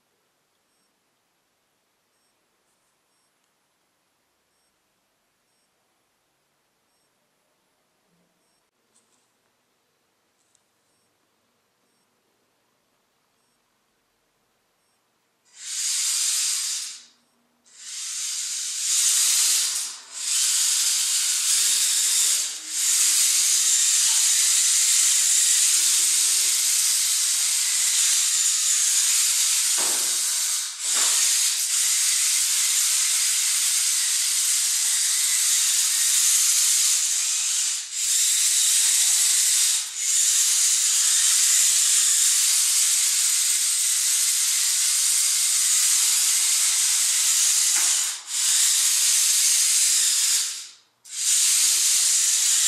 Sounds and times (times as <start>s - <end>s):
Hiss: 15.5s - 52.6s.